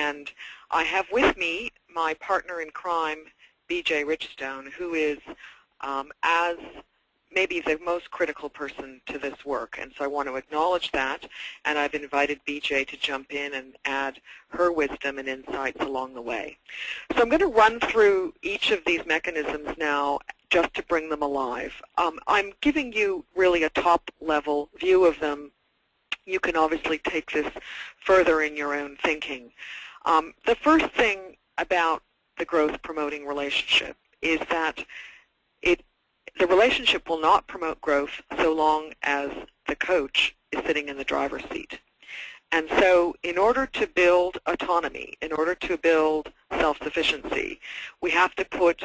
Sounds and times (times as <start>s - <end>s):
Speech: 0.0s - 25.5s, 26.2s - 48.8s.